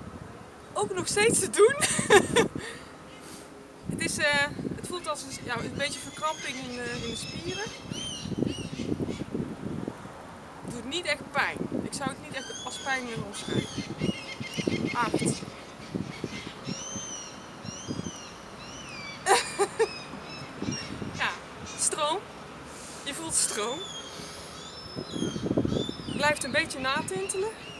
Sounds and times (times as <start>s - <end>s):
Speech: 0.8s - 1.9s, 4.0s - 7.7s, 10.7s - 13.7s, 15.0s - 15.4s, 21.2s - 22.2s, 23.1s - 23.8s, 26.2s - 27.6s.